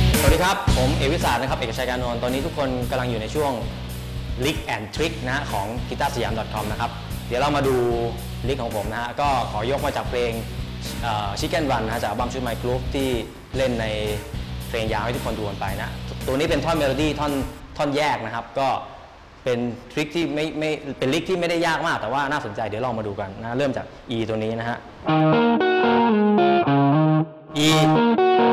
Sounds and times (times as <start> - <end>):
Music: 0.0 - 17.6, 25.0 - 28.5
Speech: 0.2 - 3.7, 4.4 - 24.9, 27.6 - 28.0.